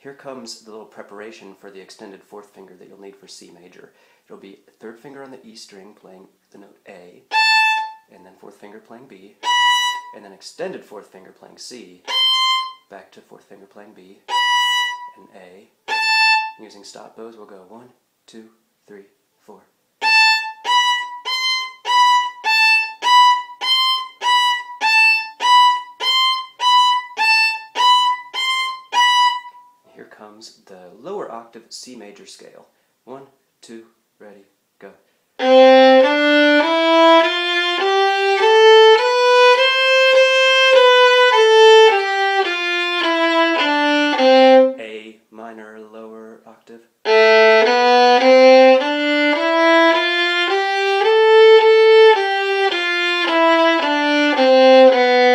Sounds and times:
Violin, fiddle: 7.2s - 8.1s, 9.4s - 10.2s, 12.0s - 12.9s, 14.3s - 15.3s, 15.9s - 16.6s, 20.0s - 29.7s, 35.4s - 44.8s, 47.1s - 55.3s.

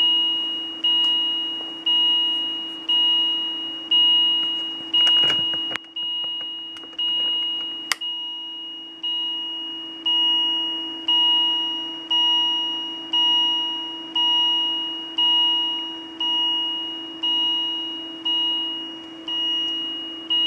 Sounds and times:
Alarm: 0.0s - 20.4s.

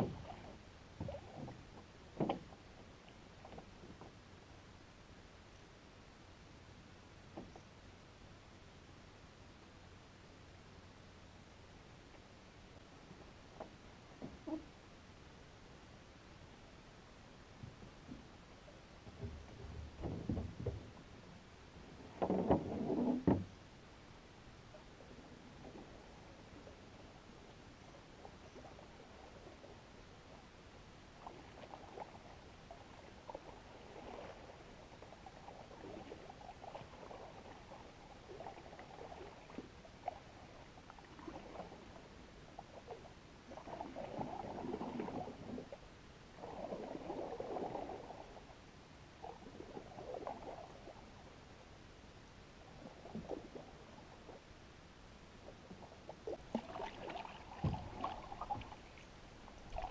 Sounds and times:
Boat, Water vehicle: 0.0s - 59.9s.

